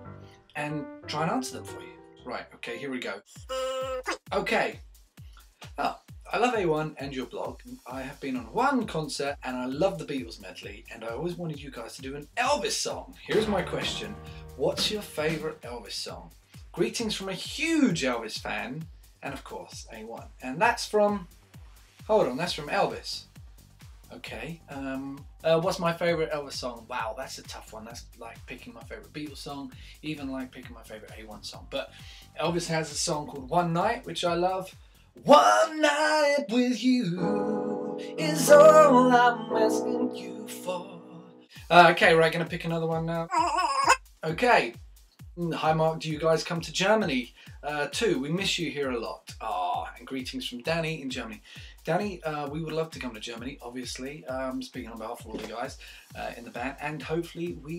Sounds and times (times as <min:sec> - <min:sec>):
Music: 0:00.0 - 0:57.7
Speech: 0:00.6 - 0:04.8, 0:05.8 - 0:21.3, 0:22.1 - 0:23.2, 0:24.1 - 0:37.3, 0:39.5 - 0:41.0, 0:41.6 - 0:44.8, 0:45.4 - 0:57.7.